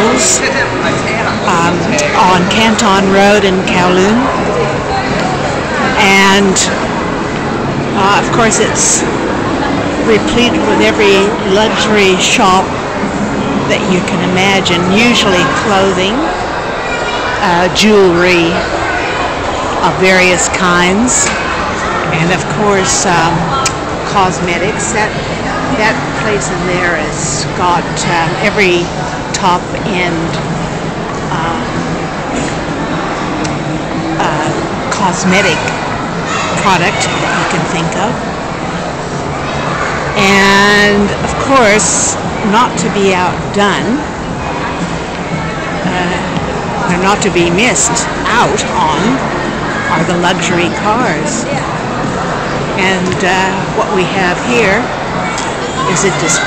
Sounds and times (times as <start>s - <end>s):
Speech: 0.0s - 6.8s, 8.0s - 9.1s, 10.0s - 12.7s, 13.7s - 16.4s, 17.4s - 18.7s, 19.8s - 21.4s, 22.0s - 30.5s, 31.3s - 31.9s, 34.2s - 35.8s, 36.4s - 38.2s, 40.2s - 44.1s, 45.8s - 49.3s, 49.9s - 51.7s, 52.8s - 55.0s, 55.8s - 56.4s.